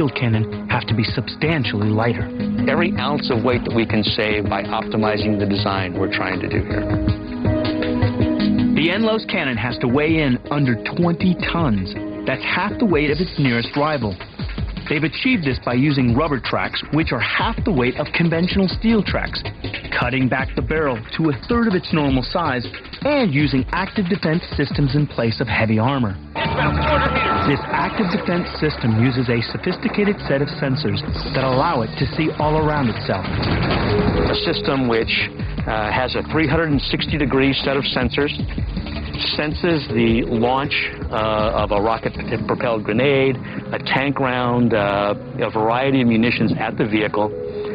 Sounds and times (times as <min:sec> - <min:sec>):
Speech: 0:00.0 - 0:06.7, 0:08.8 - 0:14.2, 0:14.9 - 0:33.3, 0:34.3 - 0:38.4, 0:39.2 - 0:47.3
Music: 0:00.0 - 0:47.7.